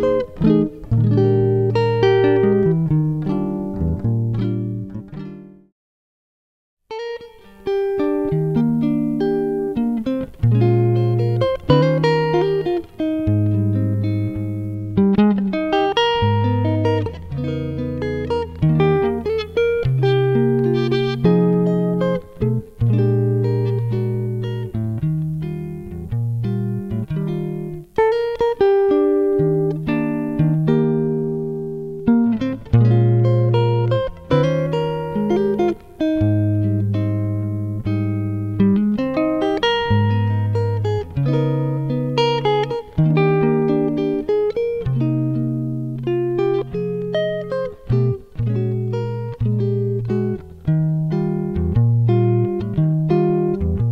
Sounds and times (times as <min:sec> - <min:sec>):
Electric guitar: 0:00.0 - 0:05.6, 0:06.9 - 0:53.9.